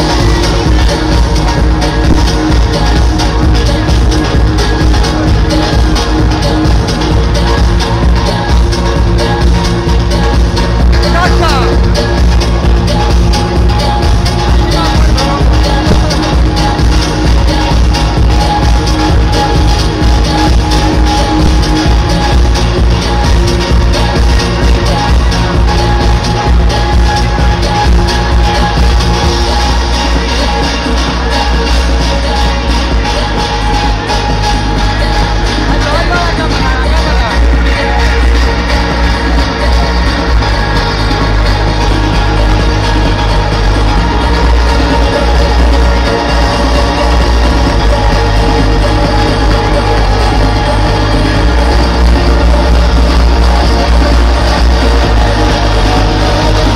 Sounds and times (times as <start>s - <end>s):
Music: 0.0s - 56.7s.